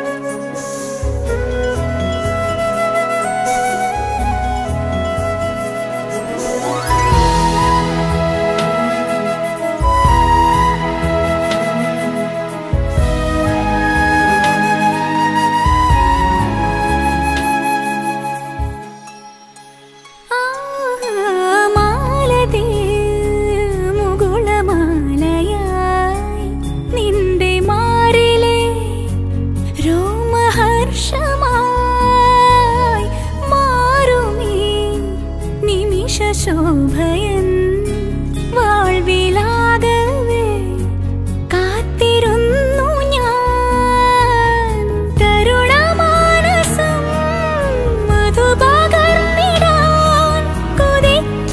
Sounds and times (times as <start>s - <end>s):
Music: 0.0s - 51.5s.